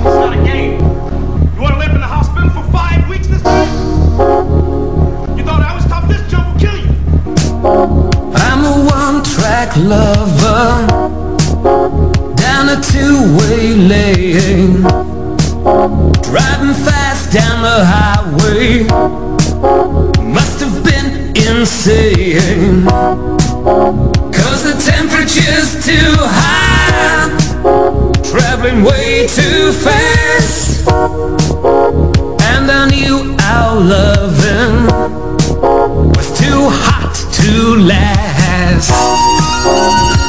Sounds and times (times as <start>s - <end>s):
Rhythm and blues: 0.0s - 40.2s.